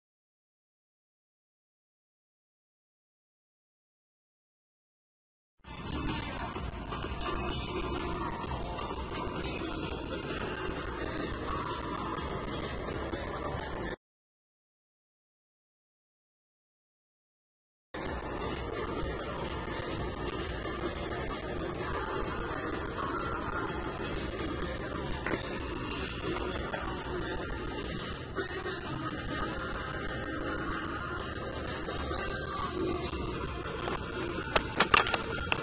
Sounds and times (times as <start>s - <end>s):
Music: 5.6s - 14.0s, 18.0s - 35.6s.